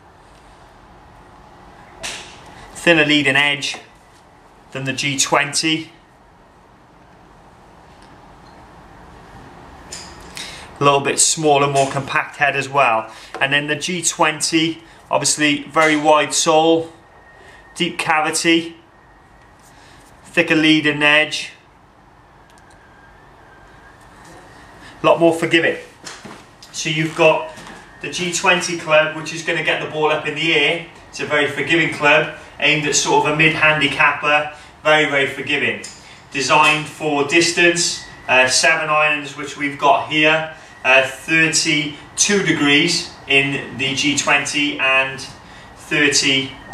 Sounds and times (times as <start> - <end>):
Speech: 2.8 - 3.9, 4.8 - 6.0, 10.8 - 17.0, 17.8 - 18.8, 20.3 - 21.6, 25.0 - 25.9, 26.8 - 46.6.